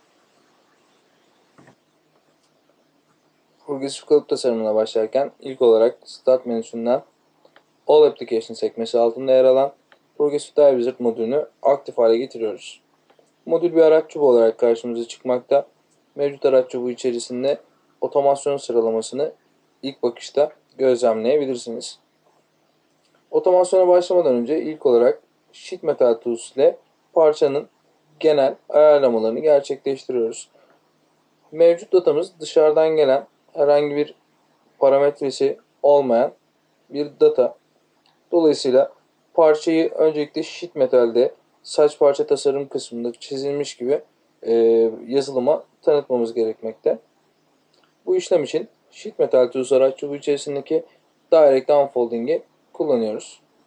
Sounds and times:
Speech: 0:03.6 - 0:07.1, 0:07.9 - 0:22.1, 0:23.3 - 0:30.6, 0:31.5 - 0:34.2, 0:34.8 - 0:37.6, 0:38.3 - 0:47.1, 0:48.0 - 0:53.5.

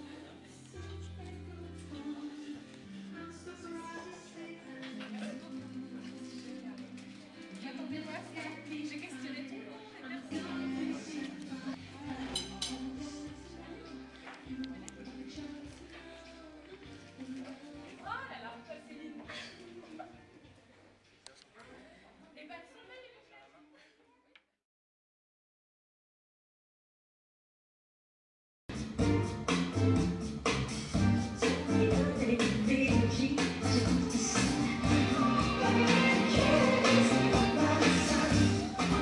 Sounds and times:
Music: 0:00.0 - 0:21.3, 0:28.7 - 0:39.0
Speech: 0:18.0 - 0:20.1.

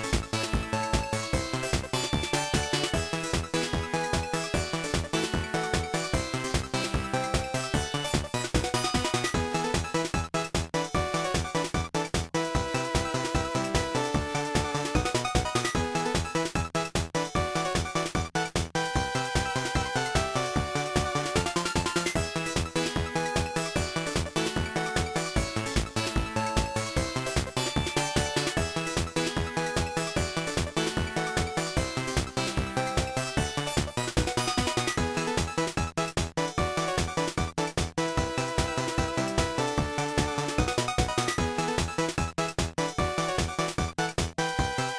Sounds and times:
Music: 0:00.0 - 0:44.9.

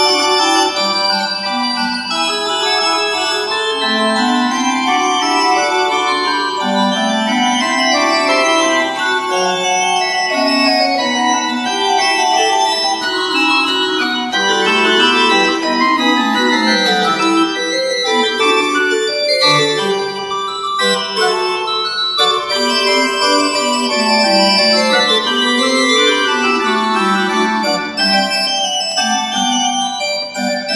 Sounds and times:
Piano: 0:00.0 - 0:30.7.

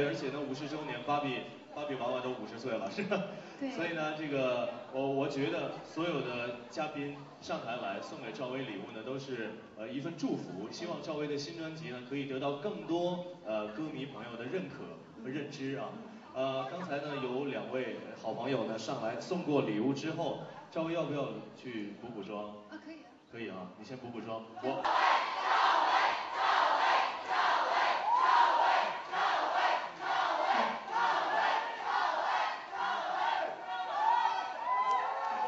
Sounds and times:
Speech: 0:00.0 - 0:24.9.

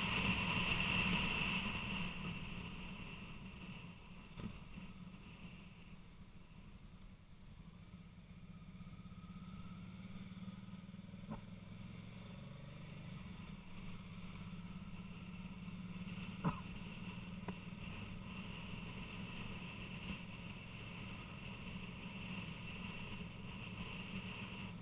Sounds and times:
Motorcycle: 0:00.0 - 0:24.8.

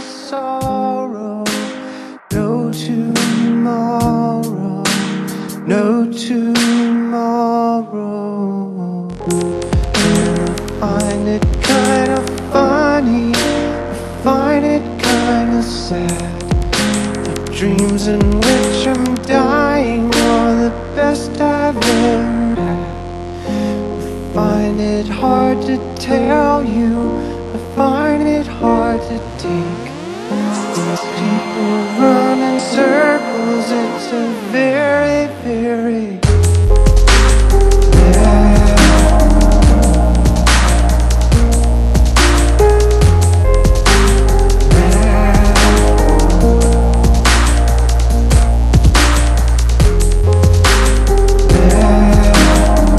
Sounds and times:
Electronic music: 0:09.1 - 0:52.9.

